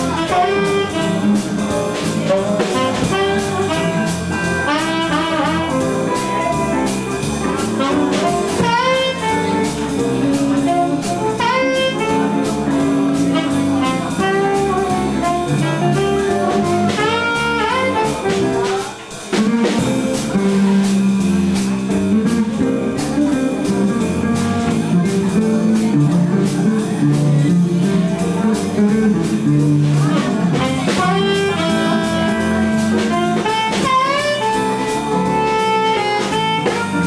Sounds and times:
Music: 0.0 - 37.0.

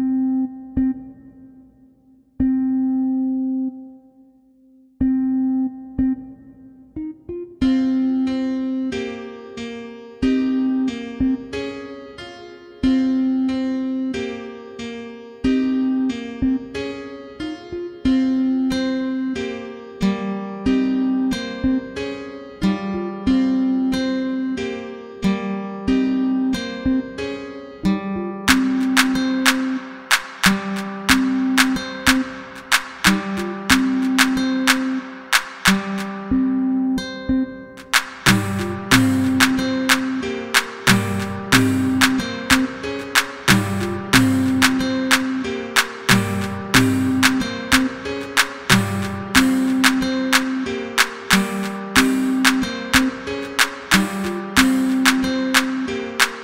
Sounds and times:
Afrobeat: 28.5 - 36.4, 37.3 - 56.4
Hip hop music: 28.5 - 36.9, 37.8 - 56.4
Rhythm and blues: 28.5 - 56.4.

